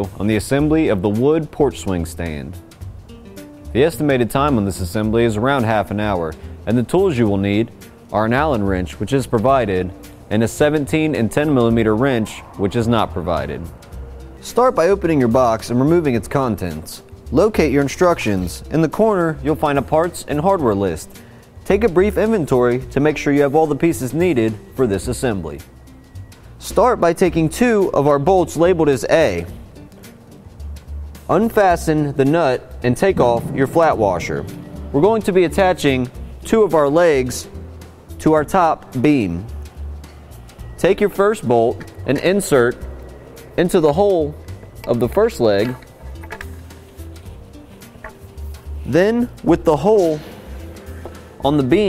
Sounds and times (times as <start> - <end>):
Speech: 0.0 - 2.6, 3.8 - 13.7, 14.4 - 21.1, 21.7 - 25.6, 26.6 - 29.5, 31.3 - 37.5, 38.2 - 39.5, 40.8 - 42.8, 43.6 - 45.8, 48.9 - 50.3, 51.4 - 51.8
Music: 0.0 - 51.8.